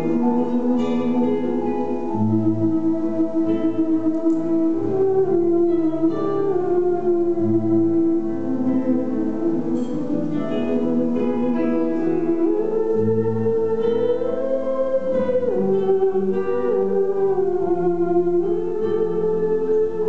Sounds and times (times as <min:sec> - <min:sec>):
Theremin: 0:00.0 - 0:20.0.